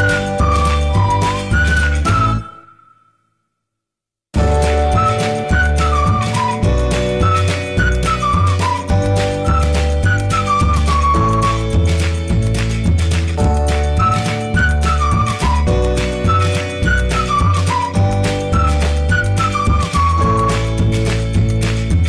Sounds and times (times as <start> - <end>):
Music: 0.0 - 3.5, 4.4 - 22.0.